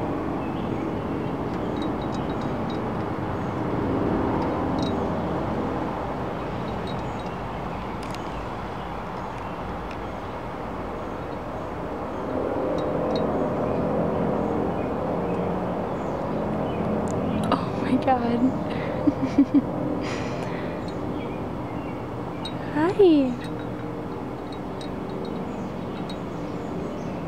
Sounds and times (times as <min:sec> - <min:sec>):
Speech: 0:17.5 - 0:18.6, 0:22.6 - 0:23.5.